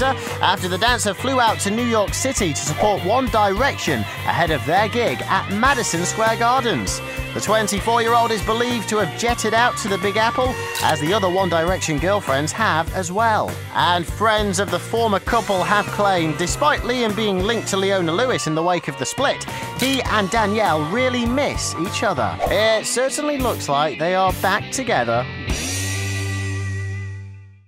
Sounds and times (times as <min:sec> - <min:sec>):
Speech: 0:00.0 - 0:25.3
Music: 0:00.0 - 0:27.6.